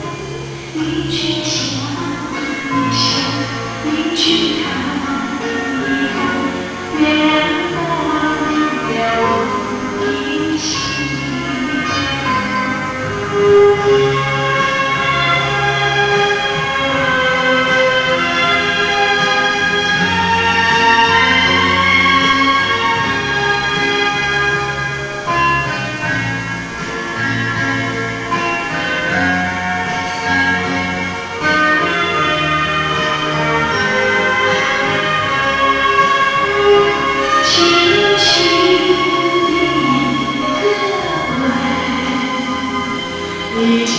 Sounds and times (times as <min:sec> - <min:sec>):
Music: 0:00.0 - 0:43.9.